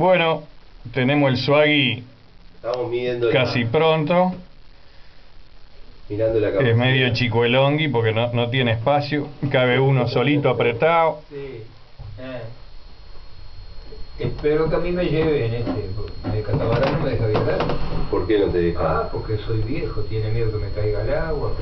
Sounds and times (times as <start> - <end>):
Speech: 0.0 - 4.5, 6.1 - 12.6, 13.9 - 21.6.